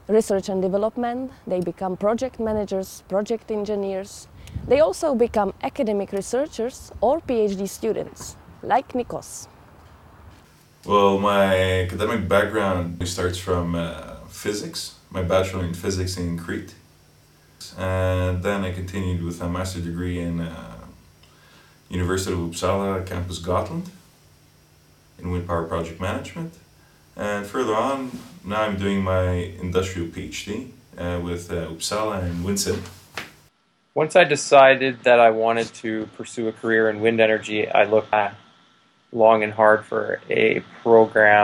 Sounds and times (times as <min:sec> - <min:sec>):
Speech: 0:00.1 - 0:09.5, 0:10.9 - 0:16.8, 0:17.6 - 0:21.0, 0:21.9 - 0:24.0, 0:25.2 - 0:26.6, 0:27.2 - 0:32.9, 0:34.0 - 0:38.4, 0:39.2 - 0:41.4.